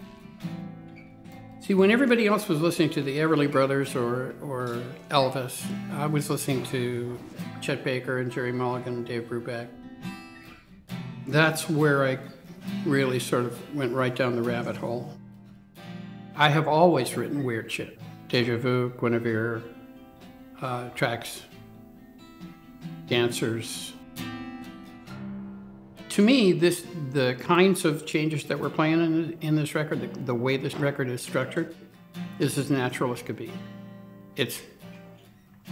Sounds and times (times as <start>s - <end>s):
Music: 0.0s - 35.7s
Speech: 1.6s - 9.7s, 11.3s - 15.2s, 16.4s - 19.8s, 20.6s - 21.6s, 23.1s - 24.0s, 26.1s - 33.6s, 34.4s - 34.8s.